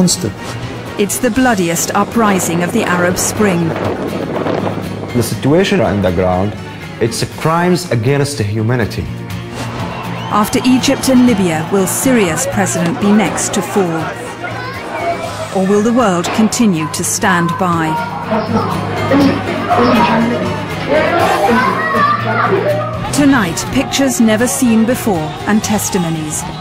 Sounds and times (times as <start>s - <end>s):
Music: 0.0s - 26.6s.